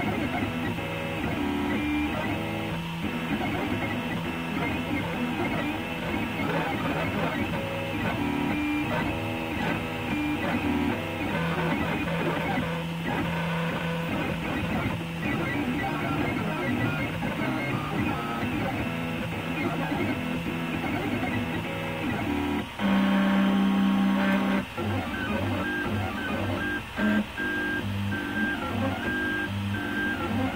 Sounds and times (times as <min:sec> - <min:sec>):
Printer: 0:00.0 - 0:30.5.